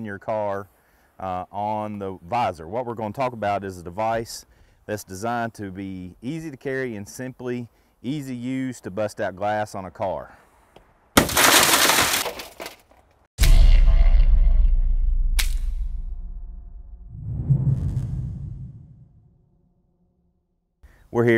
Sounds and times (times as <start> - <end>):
Speech: 0.0 - 10.4, 21.1 - 21.3
Outside, urban or manmade: 0.0 - 21.3.